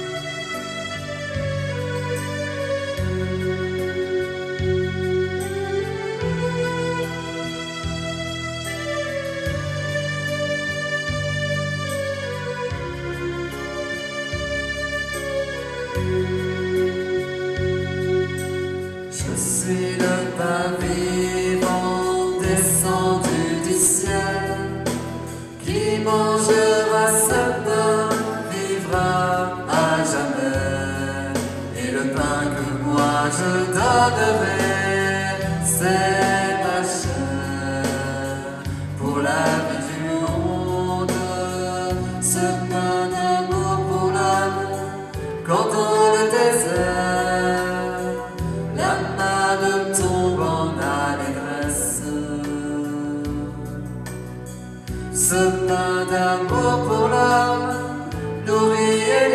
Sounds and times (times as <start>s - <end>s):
Music: 0.0s - 59.3s.